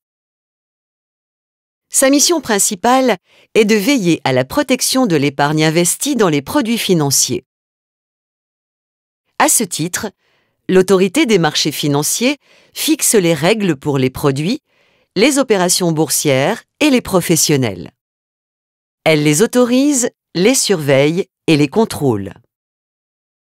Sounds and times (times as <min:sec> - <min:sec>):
Speech: 0:01.9 - 0:07.5, 0:09.4 - 0:14.6, 0:15.2 - 0:18.0, 0:19.1 - 0:22.5.